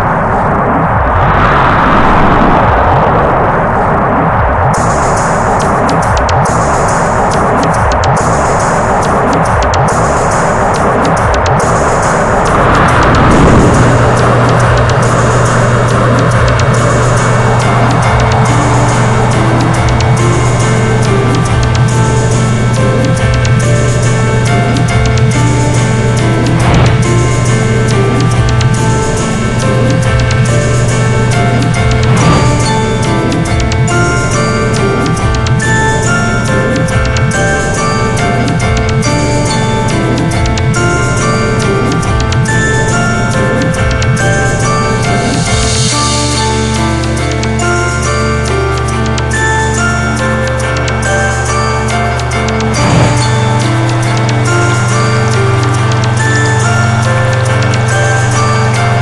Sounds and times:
Music: 0:00.0 - 0:59.0.

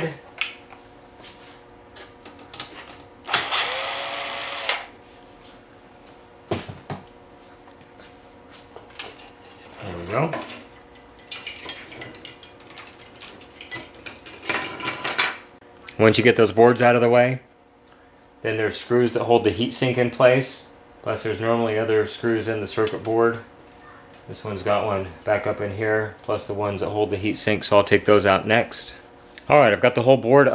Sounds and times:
Speech: 0:09.8 - 0:10.5, 0:15.9 - 0:17.5, 0:18.4 - 0:23.5, 0:24.3 - 0:30.5.

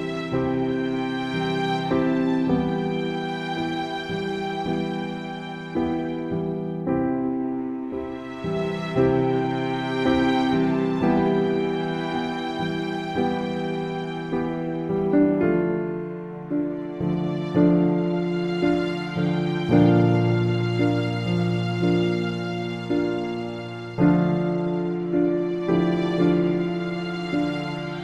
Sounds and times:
Music: 0:00.0 - 0:28.0.

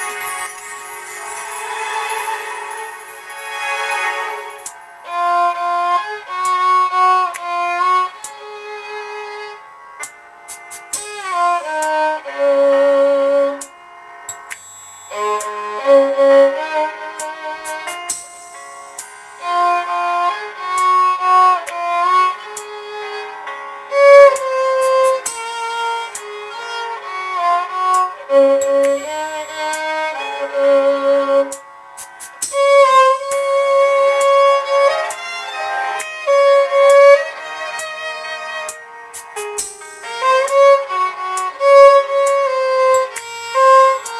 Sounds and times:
Violin, fiddle: 0:00.0 - 0:10.1, 0:10.8 - 0:14.2, 0:15.0 - 0:18.2, 0:18.9 - 0:44.2.

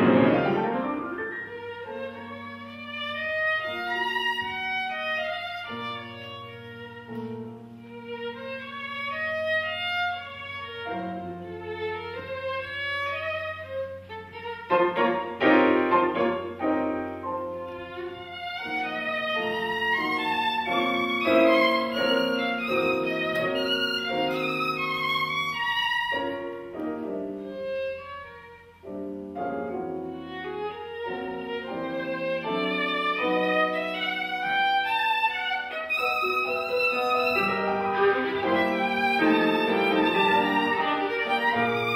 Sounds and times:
Violin, fiddle: 0:00.0 - 0:41.9.

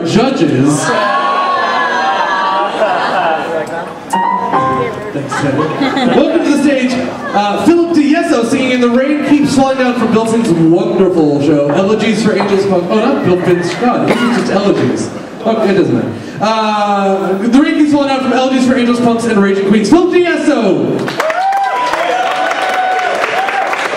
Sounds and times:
Speech: 0:04.8 - 0:20.9.

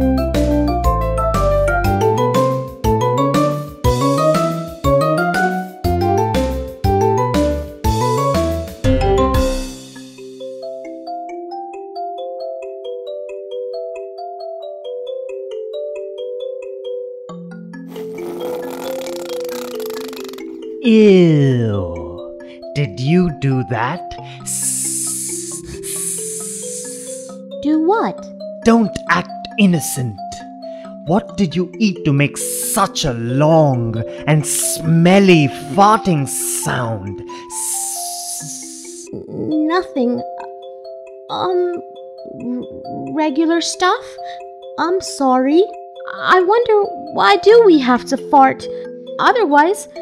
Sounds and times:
Vibraphone: 0:00.0 - 0:19.8, 0:20.4 - 0:50.0
Speech: 0:20.8 - 0:22.2, 0:22.8 - 0:24.9, 0:27.6 - 0:30.4, 0:31.1 - 0:40.2, 0:41.3 - 0:41.8, 0:42.4 - 0:44.2, 0:44.8 - 0:49.9.

